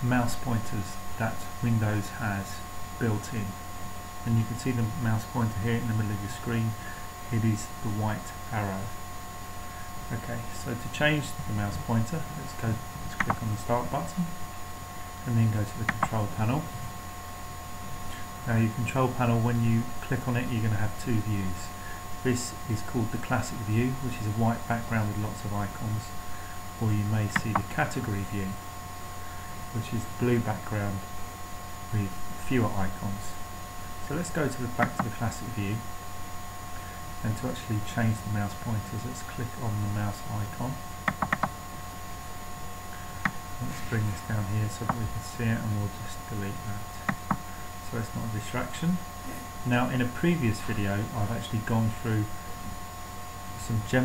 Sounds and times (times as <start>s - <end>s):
Speech: 0.0s - 3.6s, 4.2s - 9.0s, 10.1s - 14.4s, 15.2s - 16.8s, 18.4s - 26.2s, 26.8s - 28.6s, 29.7s - 31.1s, 31.9s - 33.4s, 34.0s - 35.9s, 37.2s - 40.8s, 43.6s - 46.9s, 47.8s - 52.3s, 53.6s - 54.0s.